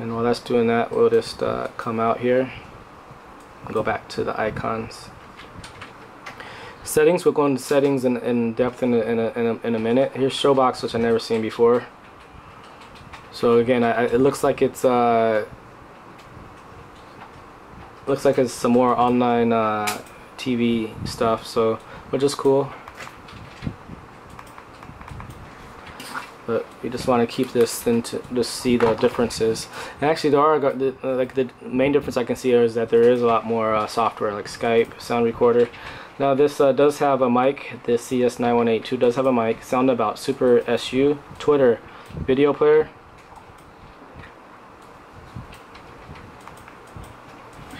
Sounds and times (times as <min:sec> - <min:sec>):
Speech: 0:00.0 - 0:02.6, 0:03.6 - 0:05.2, 0:06.8 - 0:11.9, 0:13.3 - 0:15.6, 0:18.0 - 0:22.8, 0:26.5 - 0:43.0.